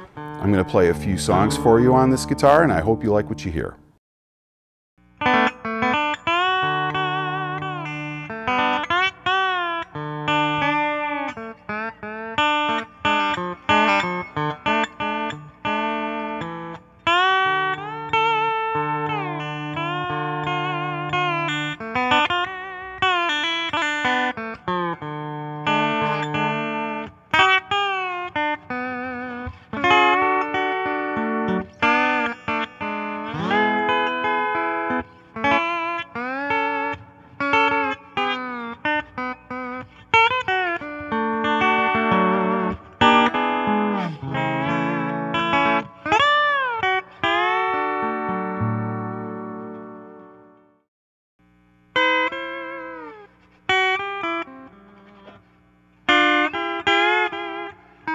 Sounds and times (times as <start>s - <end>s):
Guitar: 0.0s - 4.0s, 5.0s - 58.1s
Speech: 0.4s - 3.8s.